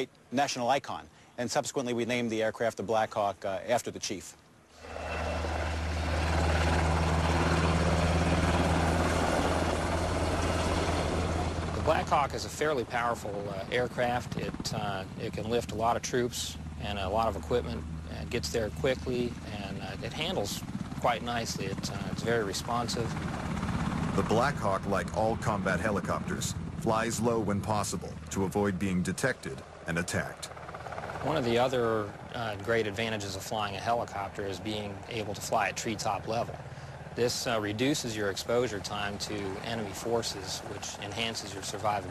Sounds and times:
Speech: 0:00.0 - 0:04.4, 0:11.8 - 0:23.2, 0:24.2 - 0:30.5, 0:31.2 - 0:36.6, 0:37.2 - 0:42.1
Helicopter: 0:04.8 - 0:42.1.

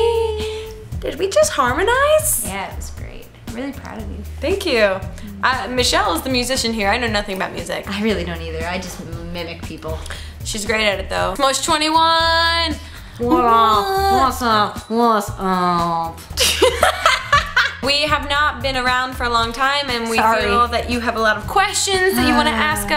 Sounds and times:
Music: 0:00.0 - 0:22.9.

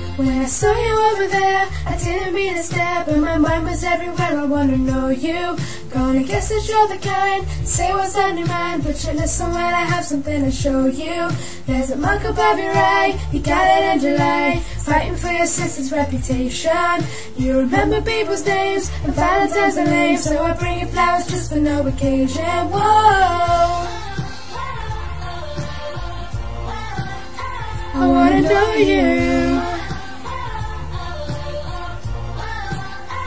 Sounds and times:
Female singing: 0:00.0 - 0:26.4, 0:27.0 - 0:32.0
Music: 0:00.0 - 0:33.2.

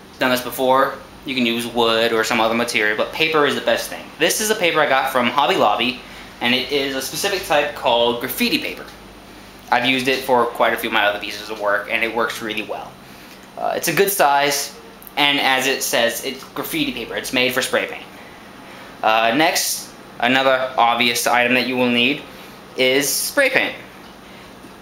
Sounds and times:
Speech: 0:00.2 - 0:09.0, 0:09.7 - 0:13.0, 0:13.6 - 0:18.1, 0:19.0 - 0:23.9.

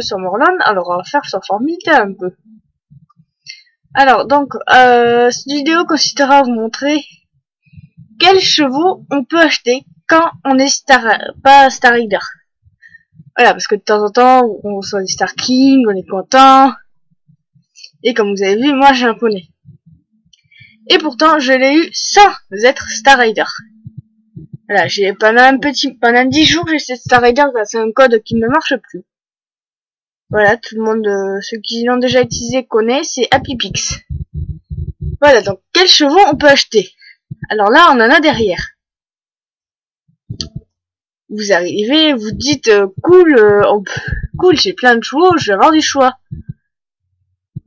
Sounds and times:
Speech: 0:00.0 - 0:02.4, 0:04.0 - 0:07.2, 0:08.2 - 0:12.5, 0:13.3 - 0:17.0, 0:17.8 - 0:19.6, 0:20.8 - 0:29.1, 0:30.3 - 0:38.8, 0:41.3 - 0:46.3.

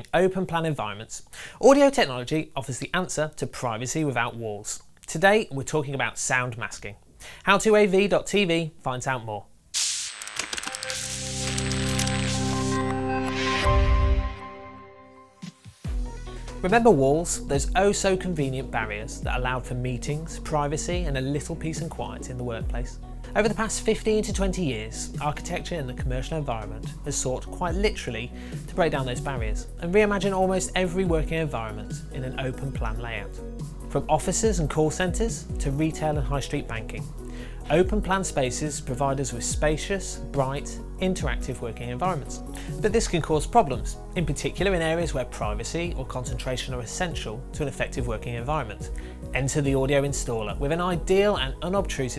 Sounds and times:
Speech: 0:00.0 - 0:09.5, 0:16.6 - 0:37.1, 0:37.7 - 0:52.1
Music: 0:10.4 - 0:52.1.

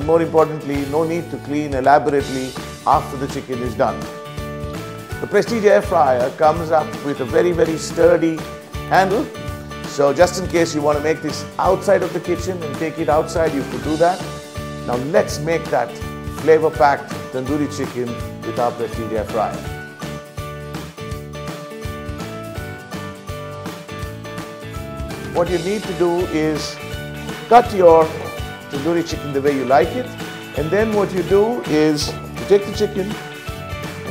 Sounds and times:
Speech: 0:00.0 - 0:04.0, 0:05.2 - 0:09.3, 0:09.9 - 0:14.3, 0:14.9 - 0:19.7, 0:25.3 - 0:26.8, 0:27.5 - 0:33.2
Music: 0:00.0 - 0:34.1.

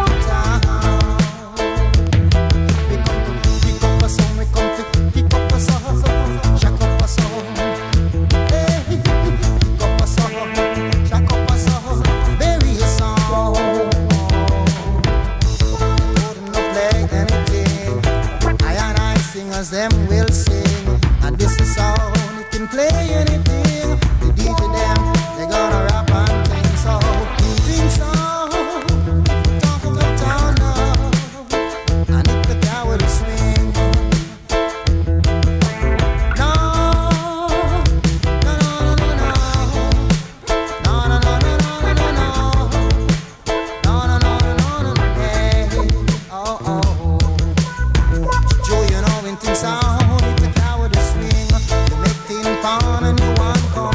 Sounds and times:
Reggae: 0:00.0 - 0:53.9.

